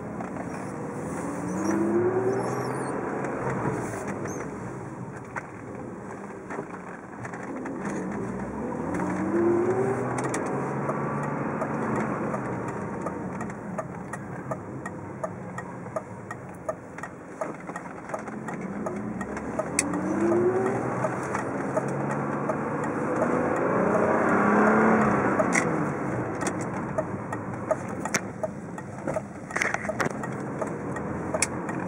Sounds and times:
Car: 0.0 - 31.8.

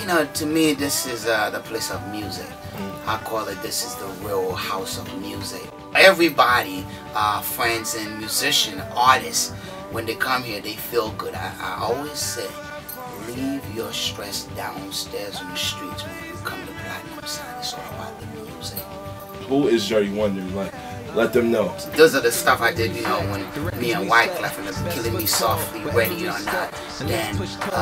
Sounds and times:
Speech: 0.0 - 12.6, 13.2 - 18.9, 19.5 - 27.8
Music: 0.0 - 27.8.

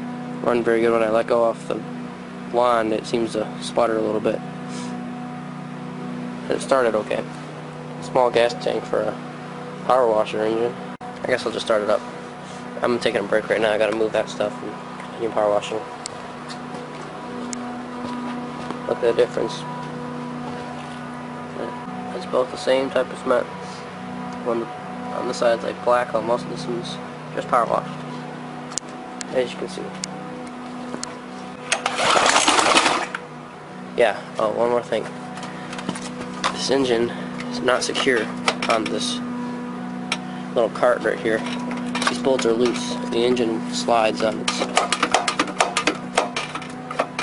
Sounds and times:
Speech: 0.4 - 1.9, 2.5 - 4.4, 6.5 - 7.3, 8.0 - 9.2, 9.9 - 12.0, 12.8 - 15.9, 18.9 - 19.7, 21.6 - 23.8, 24.4 - 27.9, 29.3 - 30.0, 34.0 - 35.1, 36.5 - 39.2, 40.6 - 41.5, 42.1 - 44.8.

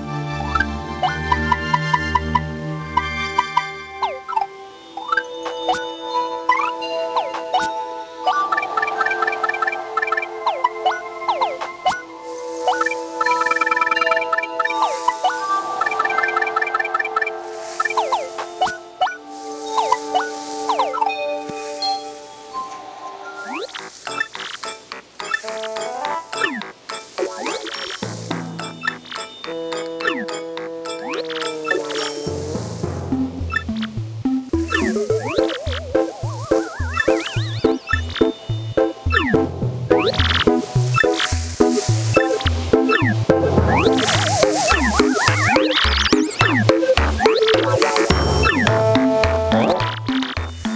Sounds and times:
Music: 0.0 - 50.7.

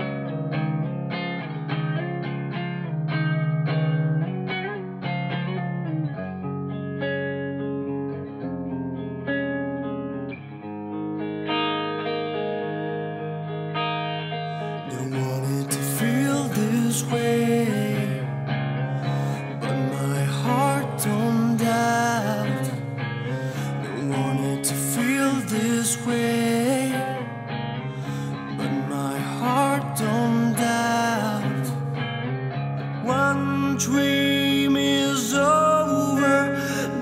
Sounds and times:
Music: 0.0 - 37.0.

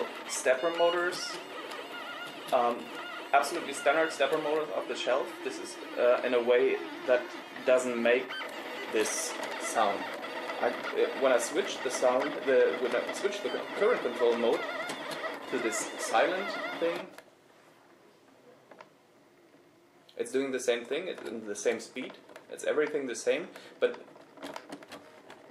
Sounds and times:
Speech: 0.0 - 1.4, 2.5 - 8.3, 9.0 - 14.6, 15.5 - 17.2, 20.2 - 24.1
Printer: 0.0 - 17.2, 24.1 - 25.5.

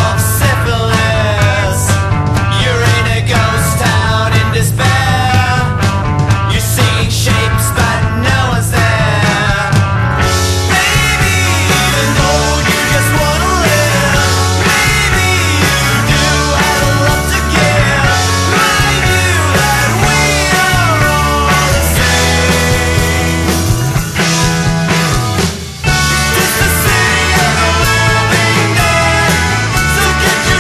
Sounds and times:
Grunge: 0.0 - 30.6.

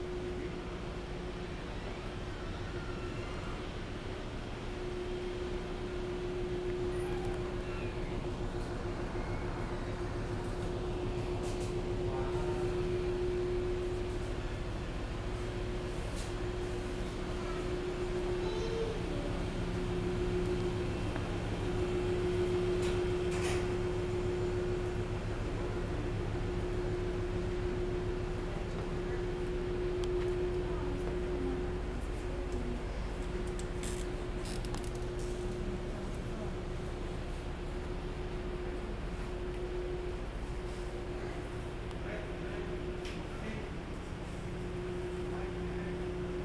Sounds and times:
Speech: 11.9 - 13.3, 28.4 - 33.2, 41.0 - 43.9, 44.8 - 46.4.

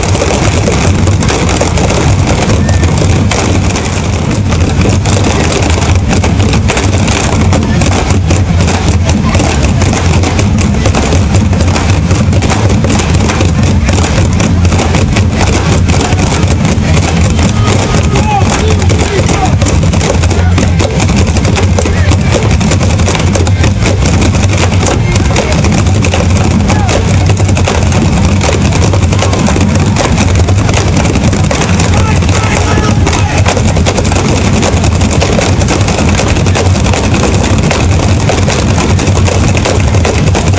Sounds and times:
Percussion: 0.0 - 40.5.

